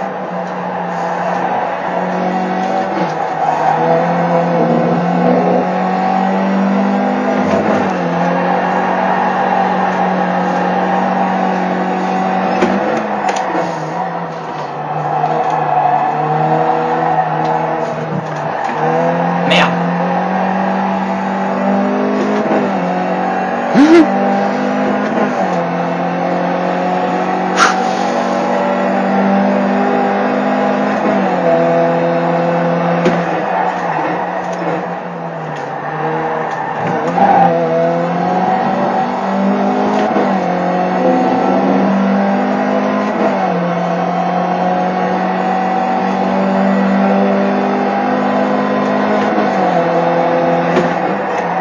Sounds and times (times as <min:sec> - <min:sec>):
Race car, auto racing: 0:00.0 - 0:51.6.